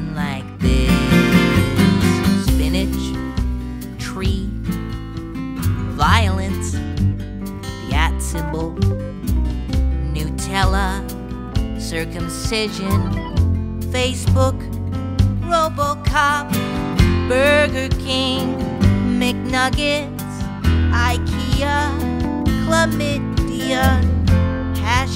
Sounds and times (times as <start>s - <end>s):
Music: 0.0s - 25.1s.